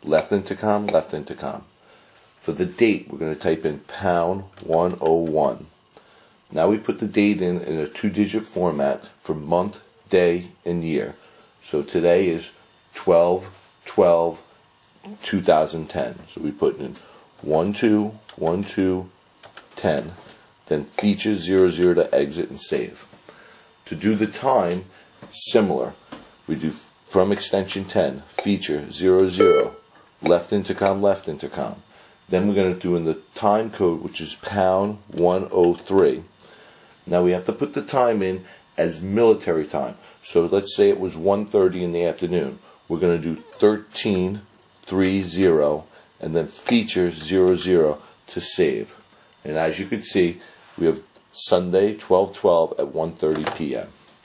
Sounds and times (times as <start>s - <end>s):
Speech: 0.0s - 1.7s, 2.4s - 5.8s, 6.5s - 14.5s, 15.1s - 23.2s, 23.8s - 36.4s, 37.0s - 54.0s.